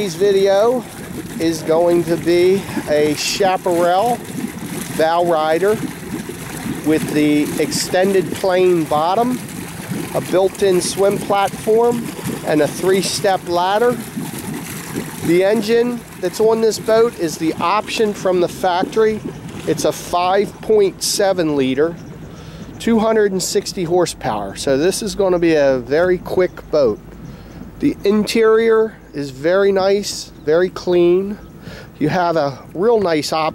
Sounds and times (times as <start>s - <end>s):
Speech: 0.0s - 4.2s, 5.0s - 5.8s, 6.9s - 9.4s, 10.2s - 14.0s, 15.3s - 22.0s, 22.8s - 27.0s, 27.8s - 31.4s, 32.0s - 33.5s
Gurgling: 0.0s - 22.8s
Motorboat, speedboat: 0.0s - 33.5s.